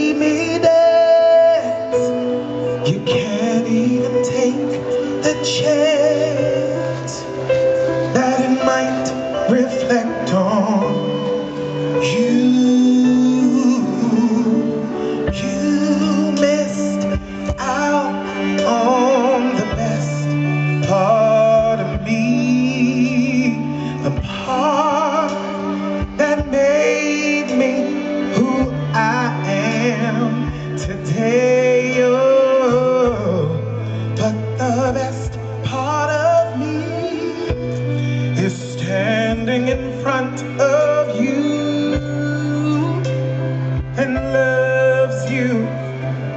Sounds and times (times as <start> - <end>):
Male singing: 0.0 - 46.3
Music: 0.0 - 46.3.